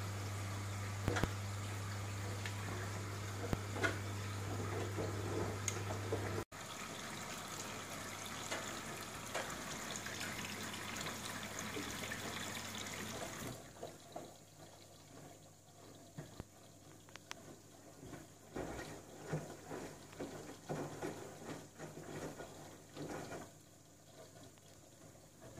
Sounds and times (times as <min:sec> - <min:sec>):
Water: 0:00.0 - 0:25.5.